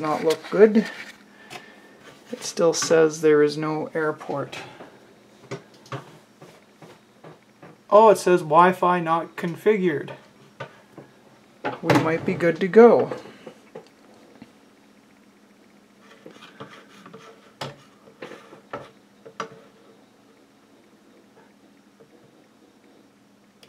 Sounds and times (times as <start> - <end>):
Speech: 0.0 - 1.0, 2.3 - 4.8, 7.9 - 10.2, 11.8 - 13.2
Inside, small room: 0.0 - 23.6.